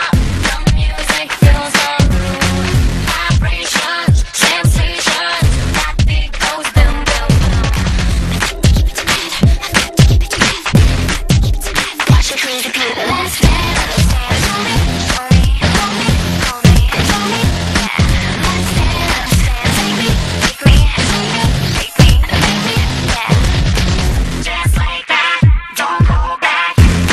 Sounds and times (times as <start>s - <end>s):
Rock and roll: 0.0s - 27.1s.